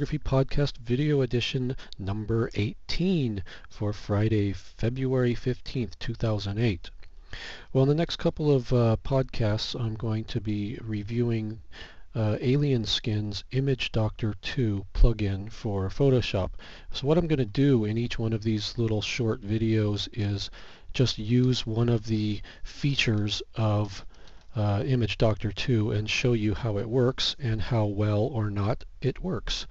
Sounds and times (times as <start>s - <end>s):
Speech: 0.0s - 7.0s, 7.7s - 29.7s.